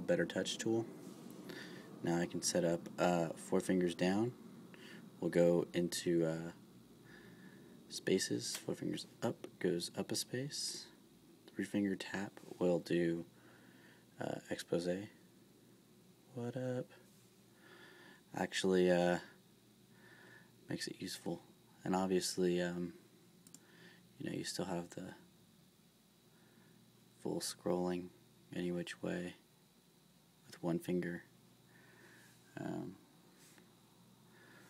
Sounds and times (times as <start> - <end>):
Speech: 0.0 - 0.9, 2.0 - 4.4, 5.2 - 6.6, 7.9 - 13.3, 14.2 - 15.2, 16.3 - 17.0, 18.3 - 19.4, 20.7 - 23.0, 24.2 - 25.2, 27.2 - 29.4, 30.5 - 31.3, 32.5 - 33.0.